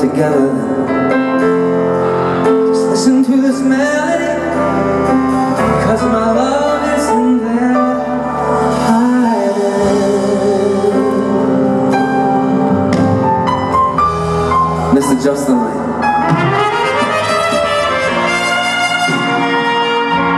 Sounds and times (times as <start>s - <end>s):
Music: 0.0s - 20.3s.